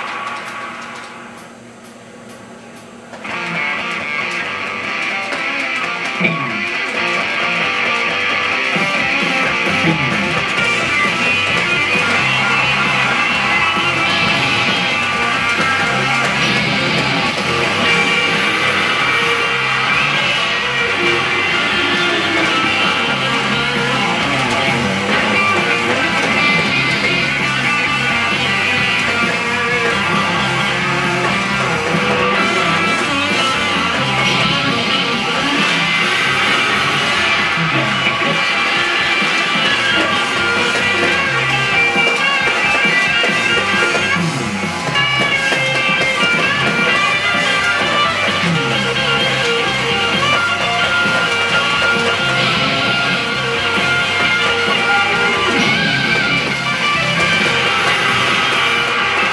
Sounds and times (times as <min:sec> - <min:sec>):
Guitar: 0:00.0 - 0:59.3.